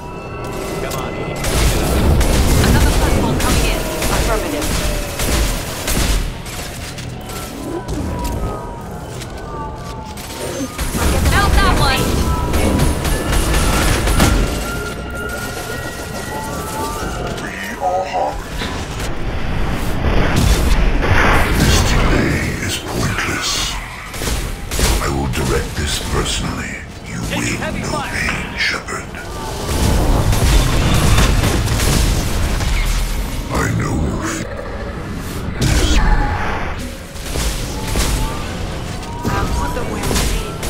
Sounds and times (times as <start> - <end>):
Speech: 25.0 - 29.2.